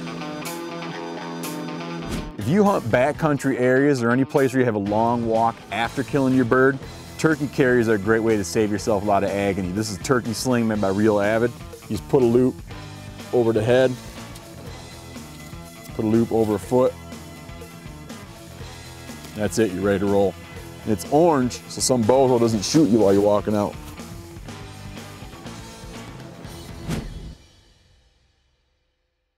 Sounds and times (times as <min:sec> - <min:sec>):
Music: 0:00.0 - 0:29.3
Speech: 0:02.4 - 0:12.6, 0:13.3 - 0:14.0, 0:15.9 - 0:17.0, 0:19.4 - 0:23.8.